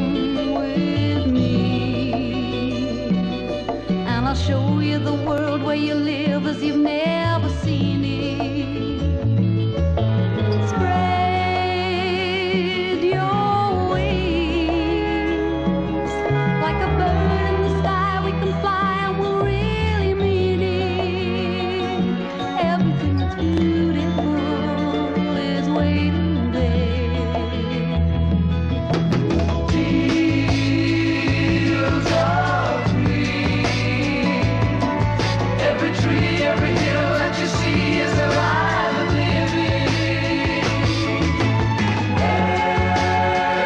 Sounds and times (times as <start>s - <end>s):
Music: 0.0s - 43.6s.